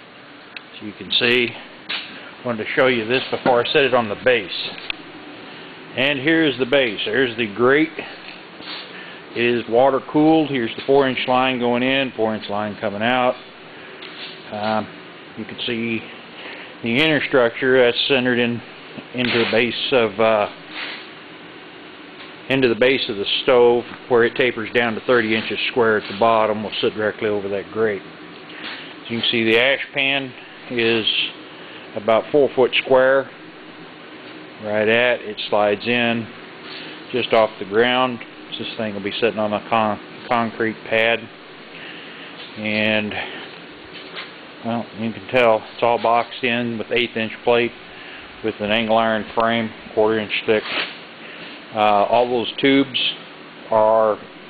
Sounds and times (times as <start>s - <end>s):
Speech: 0.7s - 1.6s, 2.4s - 4.8s, 6.0s - 8.2s, 9.4s - 13.4s, 14.5s - 16.1s, 16.8s - 20.6s, 22.5s - 28.1s, 29.0s - 31.4s, 32.0s - 33.4s, 34.6s - 36.4s, 37.1s - 41.4s, 42.6s - 43.4s, 44.6s - 47.8s, 48.4s - 50.8s, 51.7s - 54.3s.